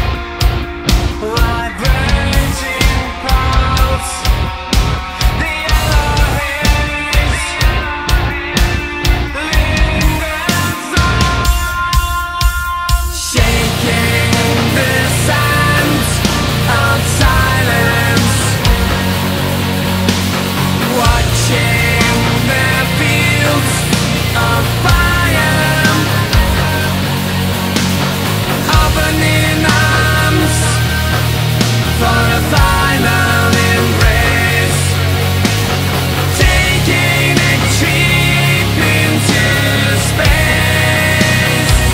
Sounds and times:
Heavy metal: 0.0s - 41.9s
Rock and roll: 0.0s - 41.9s.

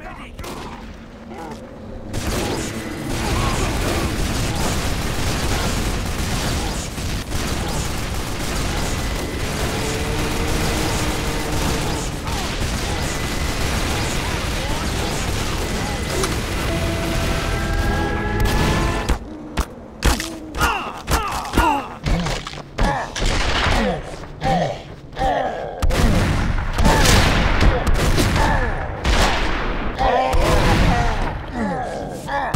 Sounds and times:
Fusillade: 2.1s - 19.2s, 25.8s - 31.3s.

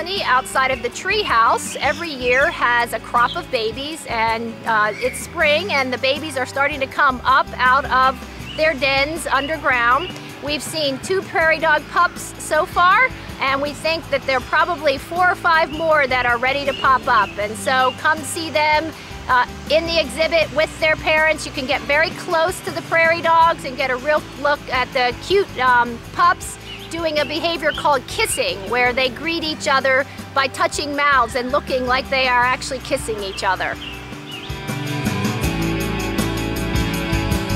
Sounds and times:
Speech: 0.0s - 33.8s
Music: 0.0s - 37.5s.

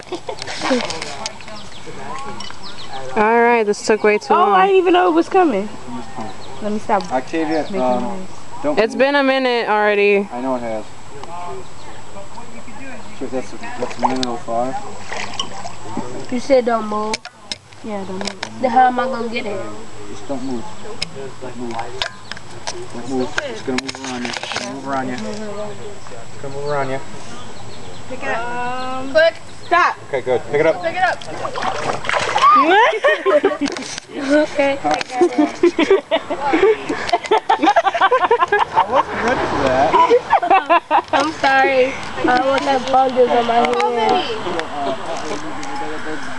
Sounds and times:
Stream: 0.0s - 26.0s, 29.3s - 46.3s.

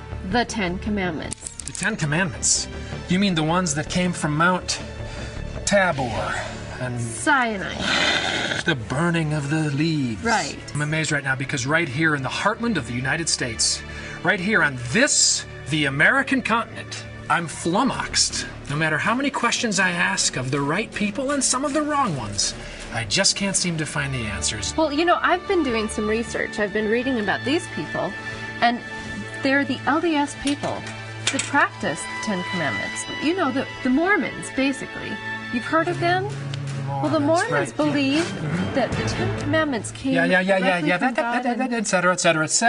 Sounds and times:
Music: 0.0s - 42.6s.

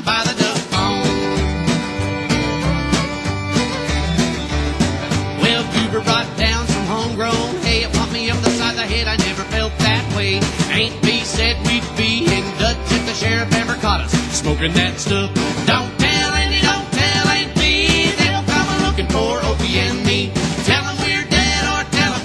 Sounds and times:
Music: 0.0s - 22.2s.

